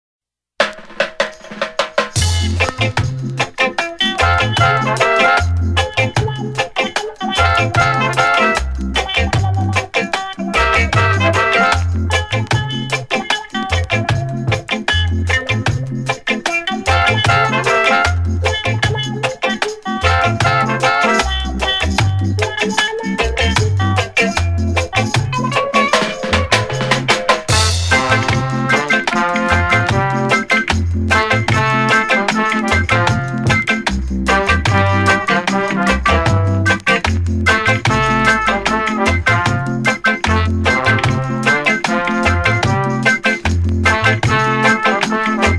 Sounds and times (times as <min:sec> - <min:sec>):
Reggae: 0:00.6 - 0:45.5.